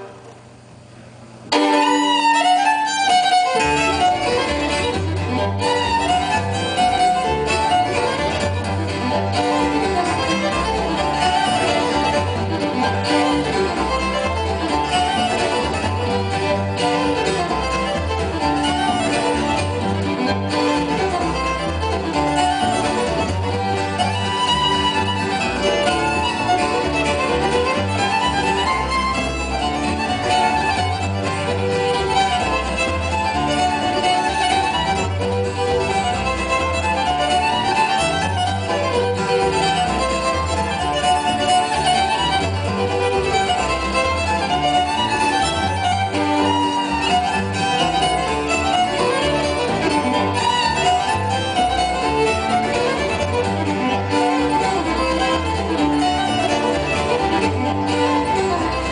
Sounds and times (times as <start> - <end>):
Violin, fiddle: 1.5 - 58.9.